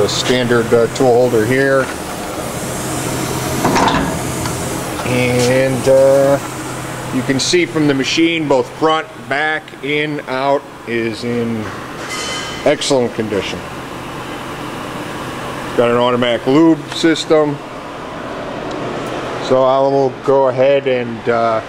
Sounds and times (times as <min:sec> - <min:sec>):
Speech: 0:00.0 - 0:01.9, 0:05.0 - 0:06.4, 0:07.1 - 0:11.7, 0:12.6 - 0:13.7, 0:15.8 - 0:17.6, 0:19.4 - 0:21.6.